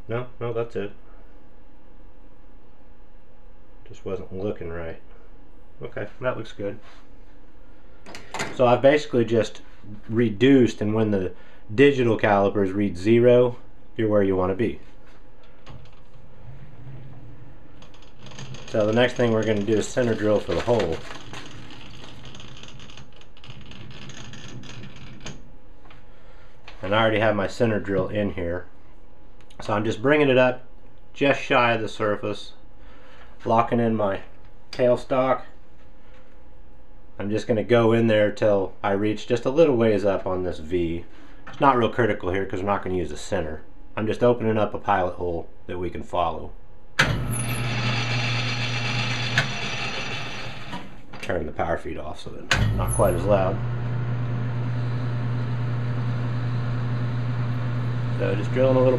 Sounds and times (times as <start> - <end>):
Speech: 0.0 - 1.0, 3.8 - 5.1, 5.8 - 6.9, 8.5 - 14.8, 18.7 - 21.1, 26.8 - 28.7, 29.6 - 32.6, 33.4 - 35.6, 37.2 - 46.6, 51.2 - 53.6, 58.2 - 58.9.